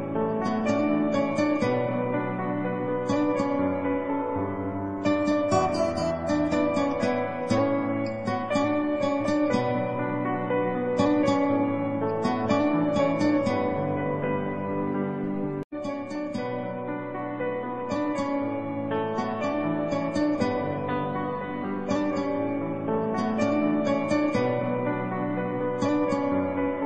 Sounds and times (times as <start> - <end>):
Music: 0.0 - 26.8.